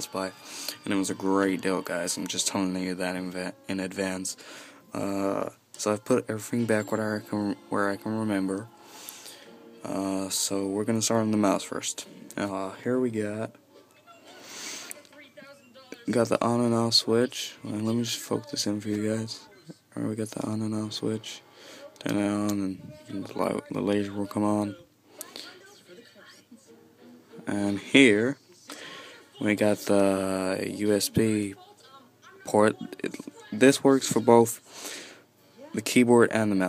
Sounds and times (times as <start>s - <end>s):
Speech: 0.0s - 4.4s, 5.0s - 8.7s, 9.9s - 14.3s, 14.9s - 21.4s, 22.0s - 26.4s, 27.5s - 28.4s, 29.4s - 34.6s, 35.7s - 36.6s.